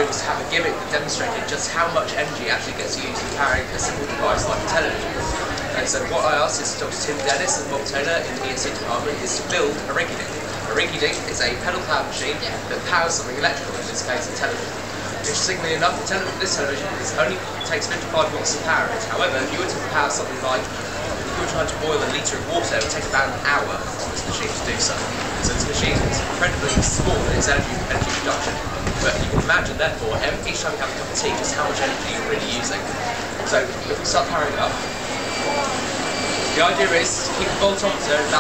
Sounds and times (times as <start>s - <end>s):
Speech: 0.0s - 38.4s.